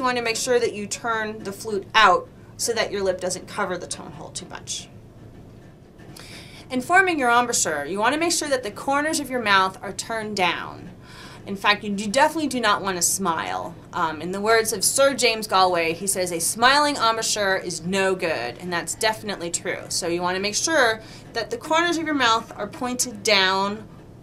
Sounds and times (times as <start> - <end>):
Speech: 0.0 - 4.9, 6.7 - 23.9.